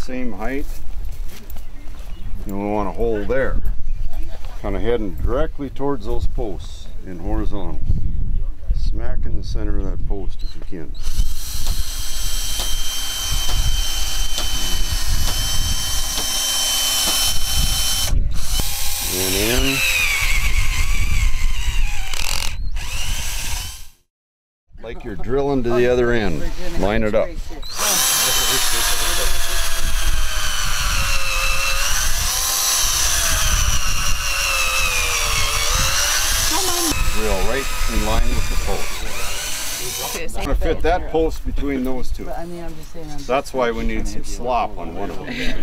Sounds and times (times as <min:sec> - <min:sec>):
Drill: 0:11.0 - 0:24.1, 0:27.7 - 0:40.3.